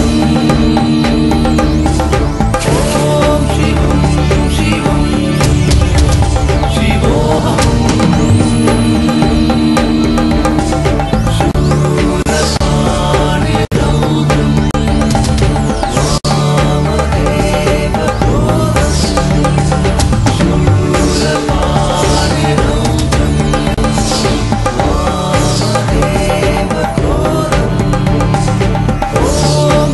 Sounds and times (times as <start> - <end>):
Mantra: 0.0 - 6.0, 6.7 - 10.7, 11.4 - 15.2, 15.9 - 29.9.